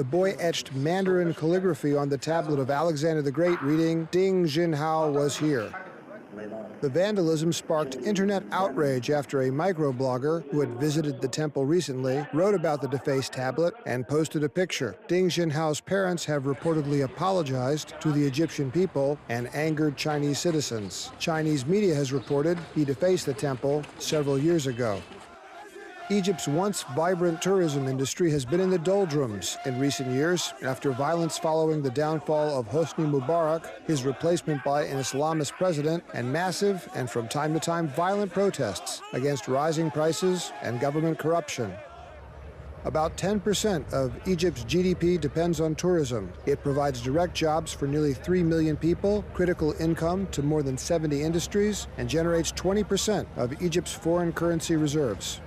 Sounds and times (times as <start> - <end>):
Speech: 0.0 - 25.0, 26.0 - 41.8, 42.9 - 55.4.